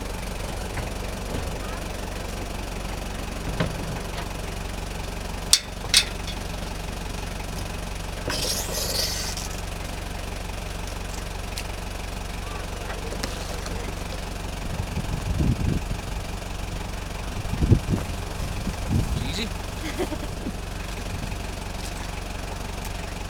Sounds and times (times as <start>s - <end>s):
Motorboat, speedboat: 0.0s - 6.0s, 9.3s - 23.2s.